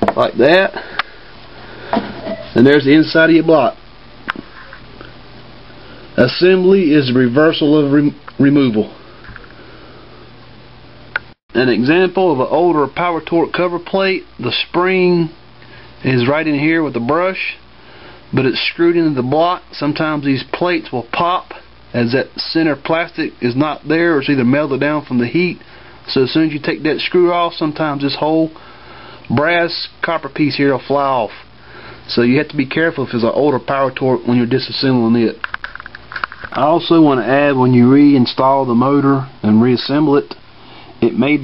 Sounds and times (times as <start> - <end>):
Speech: 0.0 - 0.8, 2.3 - 3.8, 6.2 - 9.0, 11.5 - 15.4, 16.0 - 17.7, 18.3 - 28.6, 29.3 - 31.5, 32.1 - 35.5, 36.5 - 40.4, 41.0 - 41.4.